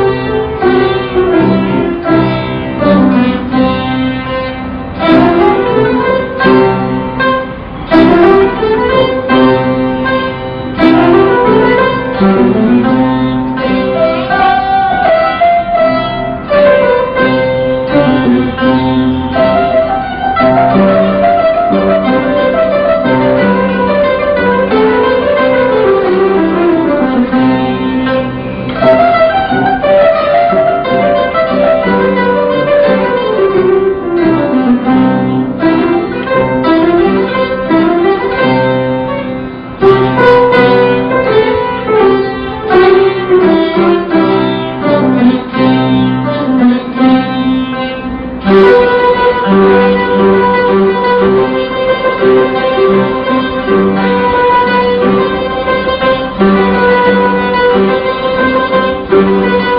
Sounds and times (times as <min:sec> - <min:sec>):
Plucked string instrument: 0:00.0 - 0:59.7.